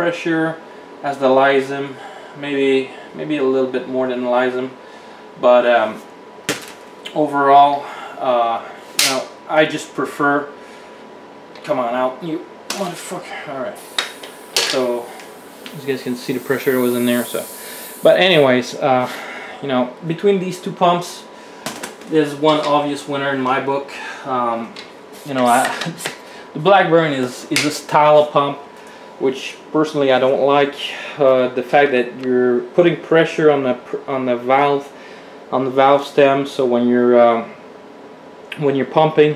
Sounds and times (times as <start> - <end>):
Speech: 0.0 - 4.8, 5.4 - 6.1, 7.1 - 10.6, 11.6 - 13.8, 14.6 - 15.1, 15.7 - 21.3, 22.1 - 28.6, 29.2 - 37.6, 38.5 - 39.3.